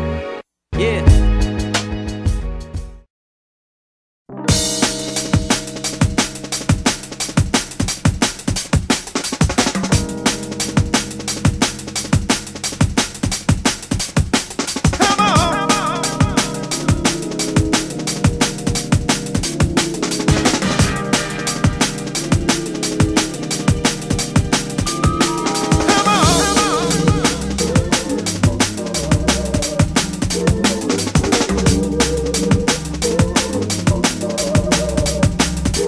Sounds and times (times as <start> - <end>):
Music: 0.0 - 3.1, 4.3 - 35.8.